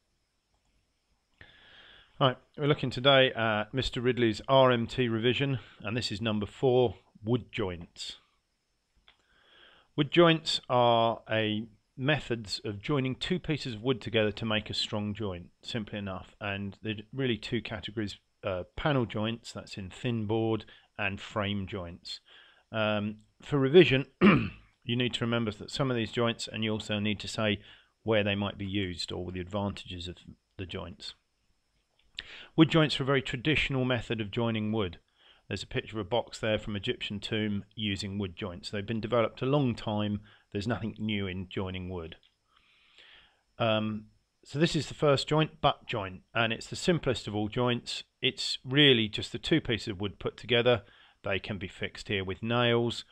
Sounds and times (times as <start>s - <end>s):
Speech: 2.2s - 8.2s, 10.0s - 31.2s, 32.2s - 42.2s, 43.6s - 53.1s.